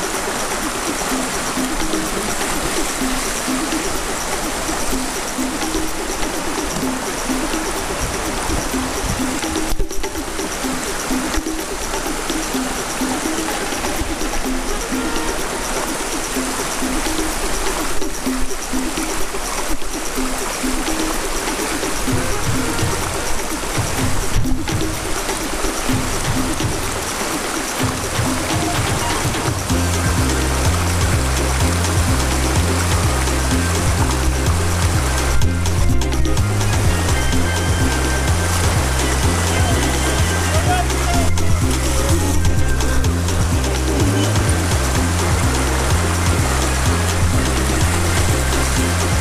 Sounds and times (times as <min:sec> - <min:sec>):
Music: 0:00.0 - 0:49.2
Rowboat, canoe, kayak: 0:00.0 - 0:49.2.